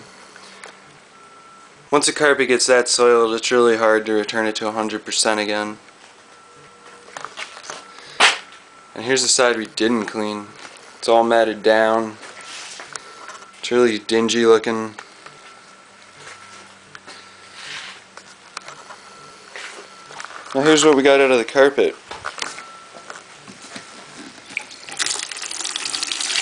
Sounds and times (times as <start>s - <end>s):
Speech: 1.9s - 5.8s, 9.0s - 12.2s, 20.6s - 22.0s.